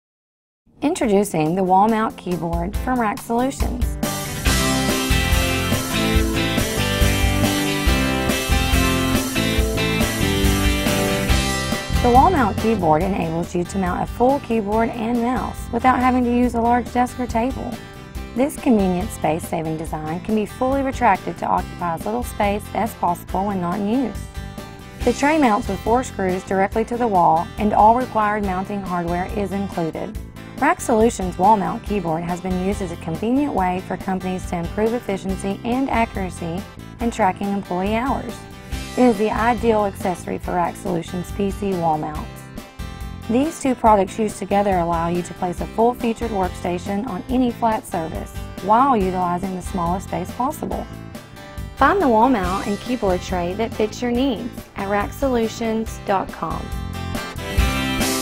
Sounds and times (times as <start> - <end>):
Music: 0.7 - 58.2
Speech: 0.8 - 3.9, 12.0 - 17.8, 18.4 - 24.2, 25.1 - 38.4, 39.0 - 42.3, 43.3 - 50.9, 51.8 - 56.7.